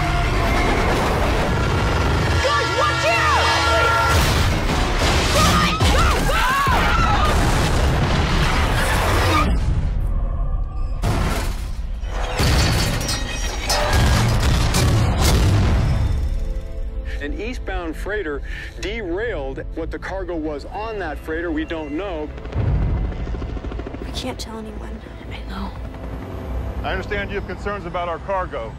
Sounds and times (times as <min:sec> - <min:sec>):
Music: 0:00.0 - 0:07.2, 0:11.0 - 0:28.7.